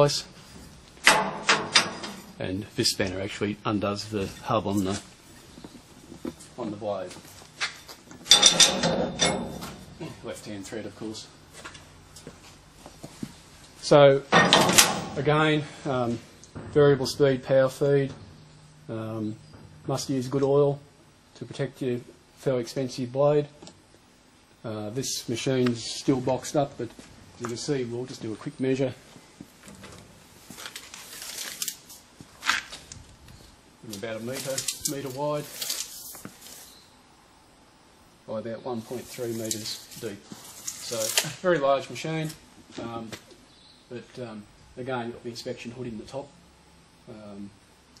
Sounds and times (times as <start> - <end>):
Speech: 0.0 - 0.3, 2.4 - 5.1, 6.6 - 7.2, 10.0 - 11.3, 13.8 - 14.4, 15.1 - 18.2, 18.9 - 23.6, 24.6 - 29.0, 33.8 - 35.6, 38.3 - 43.3, 43.9 - 46.4, 47.1 - 47.6.